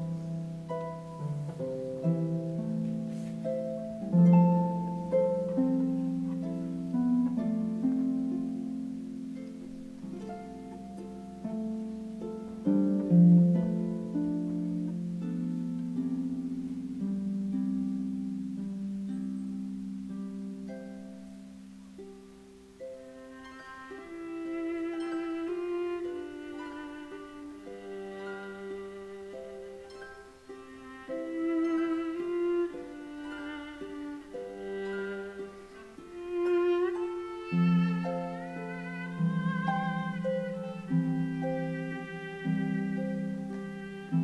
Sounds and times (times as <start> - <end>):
Violin, fiddle: 0.0 - 8.0, 22.8 - 44.2
Harp: 0.0 - 44.2
Orchestra: 0.0 - 44.2.